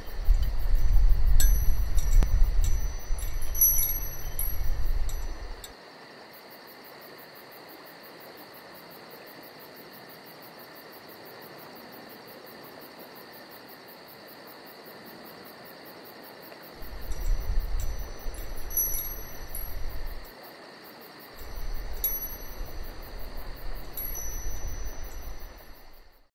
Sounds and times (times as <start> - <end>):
Wind chime: 0.1 - 5.7, 16.8 - 20.3, 21.4 - 26.3.